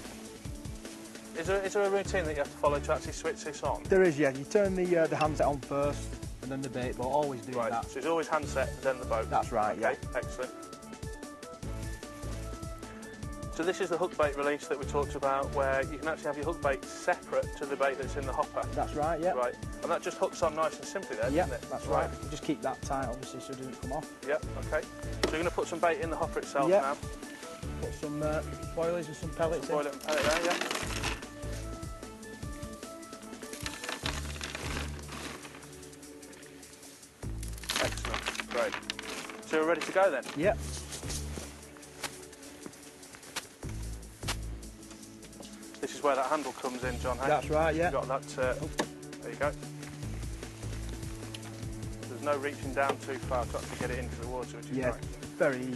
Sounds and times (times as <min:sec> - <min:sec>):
Music: 0:00.0 - 0:55.7
Speech: 0:27.8 - 0:30.6, 0:45.8 - 0:49.5, 0:52.1 - 0:55.7.